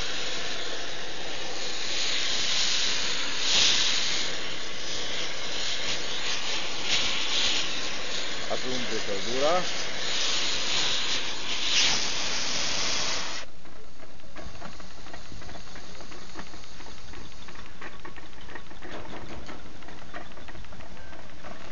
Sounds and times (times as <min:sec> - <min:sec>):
Engine: 0:00.0 - 0:21.7
Speech: 0:08.4 - 0:09.7.